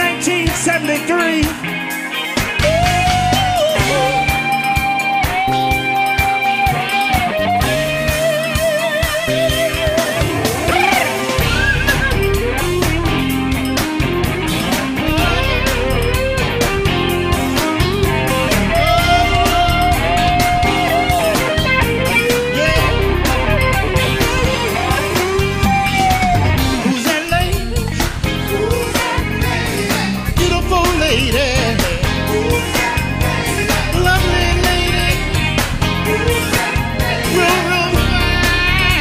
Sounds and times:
Music: 0.0 - 39.0.

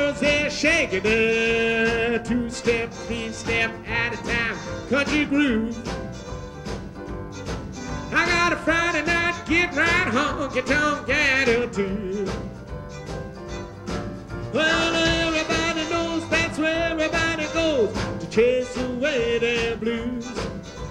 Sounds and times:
Country: 0.0 - 20.9.

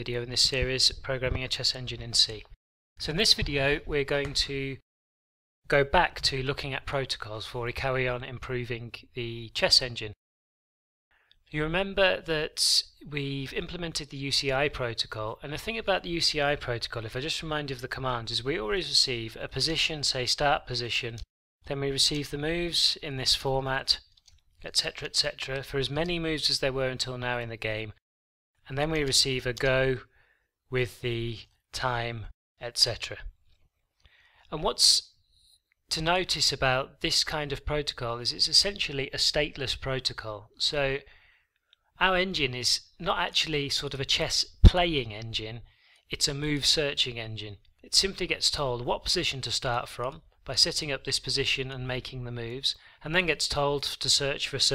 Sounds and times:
Speech: 0.0 - 4.8, 5.7 - 10.2, 11.5 - 28.0, 28.6 - 30.1, 30.7 - 33.4, 34.5 - 35.2, 35.9 - 41.1, 42.0 - 54.7.

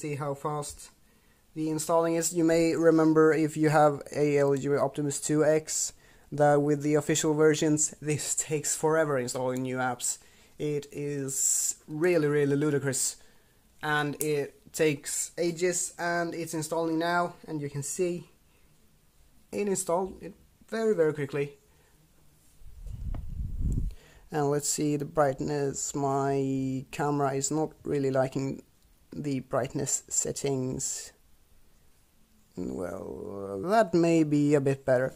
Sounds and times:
Speech: 0.0 - 1.0, 1.6 - 13.2, 13.8 - 18.4, 19.5 - 21.6, 24.3 - 31.2, 32.5 - 35.1
Inside, small room: 0.0 - 35.1.

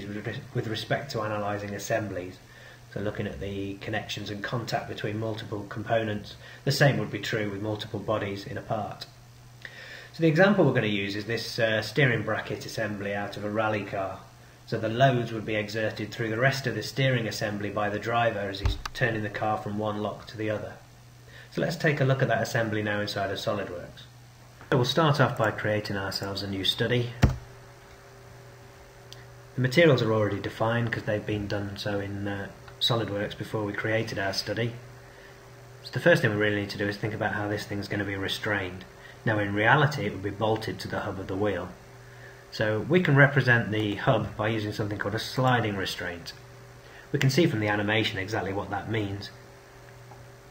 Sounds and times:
Speech: 0.0 - 9.2, 10.2 - 20.9, 21.5 - 27.2, 29.6 - 34.8, 35.8 - 41.8, 42.5 - 46.4, 47.1 - 49.4.

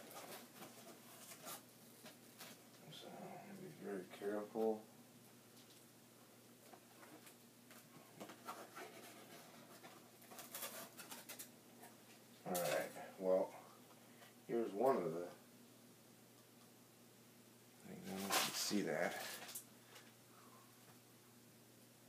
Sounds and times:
Speech: 2.8 - 4.9, 12.4 - 13.6, 14.5 - 15.4, 17.8 - 19.4.

